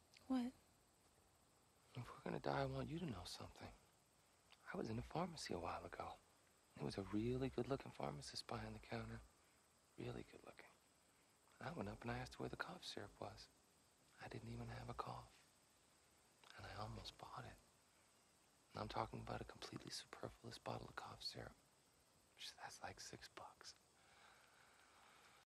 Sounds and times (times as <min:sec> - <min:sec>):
Speech: 0:00.2 - 0:00.5, 0:01.9 - 0:03.8, 0:04.6 - 0:06.2, 0:06.8 - 0:09.2, 0:10.0 - 0:10.8, 0:11.6 - 0:13.5, 0:14.2 - 0:15.4, 0:16.4 - 0:17.6, 0:18.7 - 0:21.6, 0:22.4 - 0:23.8.